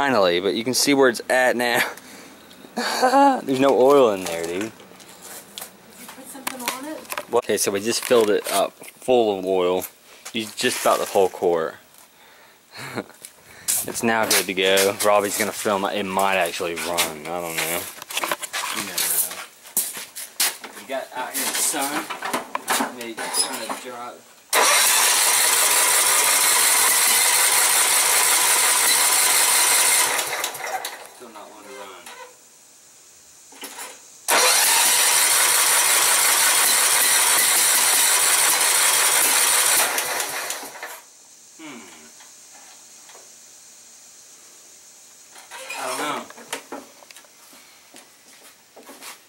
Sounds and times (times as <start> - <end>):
Speech: 0.0 - 2.0, 3.5 - 4.7, 6.2 - 11.8, 13.9 - 17.9, 18.7 - 19.4, 20.8 - 22.1, 22.8 - 24.2, 31.2 - 32.1, 45.7 - 46.3
Lawn mower: 24.5 - 31.2, 33.7 - 41.0.